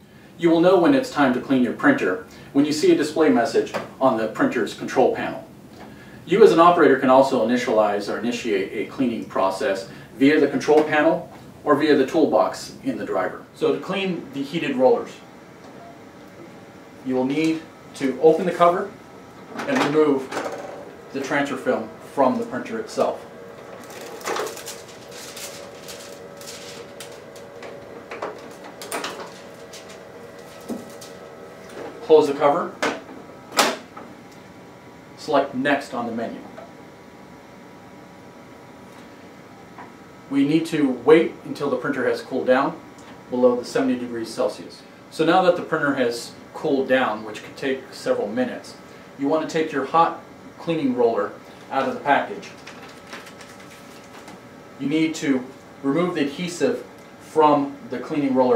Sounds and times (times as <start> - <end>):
Speech: 0.4 - 5.5, 6.3 - 15.3, 17.0 - 19.0, 19.6 - 20.4, 21.1 - 23.2, 32.0 - 32.8, 35.2 - 36.6, 40.3 - 52.6, 54.8 - 58.5.